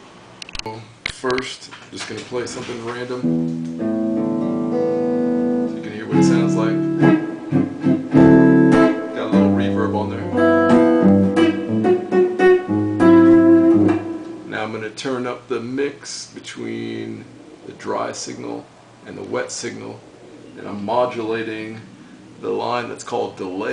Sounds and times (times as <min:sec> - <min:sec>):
Speech: 0:00.6 - 0:03.3, 0:05.7 - 0:06.8, 0:09.2 - 0:10.4, 0:14.5 - 0:20.0, 0:20.6 - 0:23.7
Guitar: 0:01.3 - 0:15.5
Effects unit: 0:03.2 - 0:14.5.